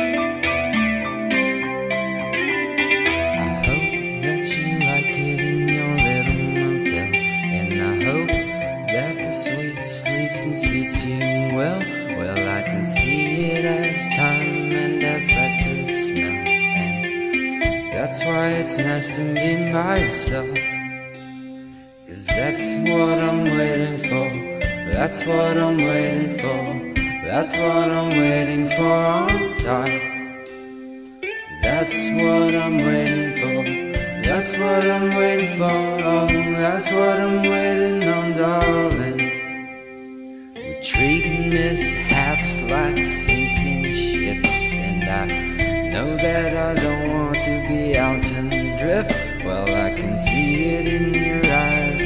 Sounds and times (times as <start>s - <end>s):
Music: 0.0s - 52.0s.